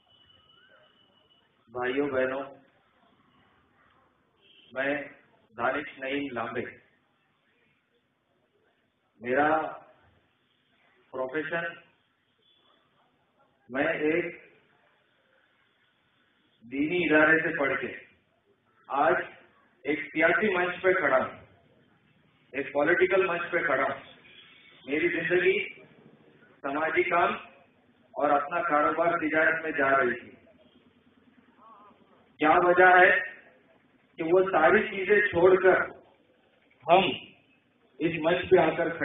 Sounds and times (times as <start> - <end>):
Male speech, man speaking: 1.7 - 2.7, 4.7 - 6.9, 9.2 - 10.0, 11.1 - 11.9, 13.7 - 14.5, 16.7 - 18.2, 18.9 - 21.5, 22.5 - 24.2, 24.9 - 25.8, 26.6 - 27.6, 28.2 - 30.4, 32.4 - 33.5, 34.2 - 36.0, 36.8 - 37.3, 38.0 - 39.0
Narration, monologue: 1.7 - 2.8, 4.4 - 7.5, 8.9 - 10.4, 11.0 - 12.1, 13.7 - 14.7, 16.5 - 39.0.